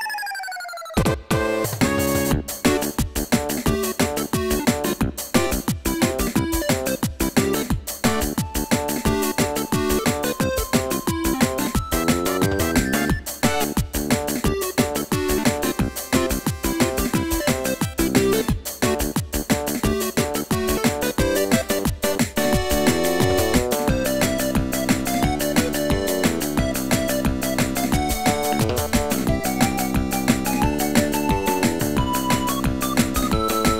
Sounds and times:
Soundtrack music: 0.0s - 33.7s.

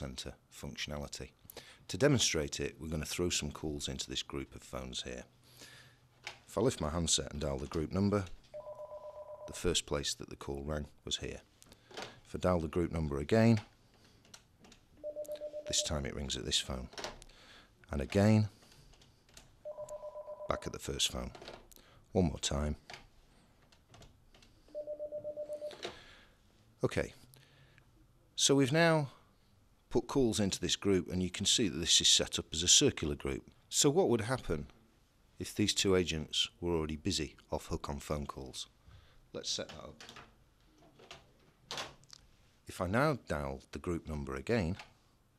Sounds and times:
Speech: 0.0s - 5.3s, 6.5s - 8.4s, 9.5s - 11.5s, 12.3s - 13.7s, 15.7s - 17.0s, 17.9s - 18.5s, 20.5s - 21.4s, 22.1s - 22.8s, 26.8s - 27.2s, 28.4s - 29.2s, 29.9s - 34.7s, 35.4s - 38.7s, 39.3s - 40.1s, 42.7s - 44.9s
Ringtone: 8.6s - 9.6s, 19.7s - 20.6s, 24.7s - 25.8s
Telephone bell ringing: 8.6s - 9.6s, 15.0s - 15.9s, 19.6s - 20.7s, 24.7s - 25.8s.

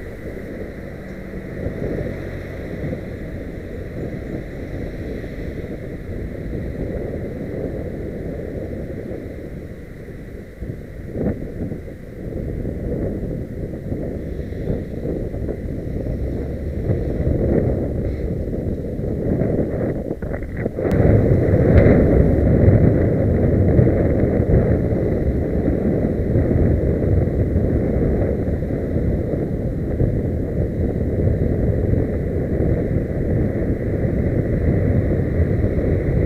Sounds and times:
Motor vehicle (road): 0.0s - 36.2s.

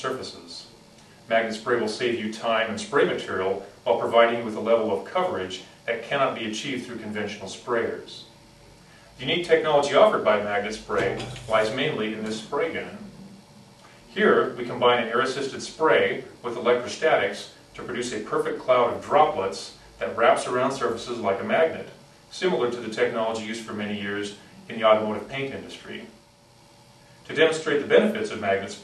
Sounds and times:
Speech: 0.0s - 8.4s, 9.2s - 13.3s, 14.1s - 26.2s, 27.3s - 28.8s.

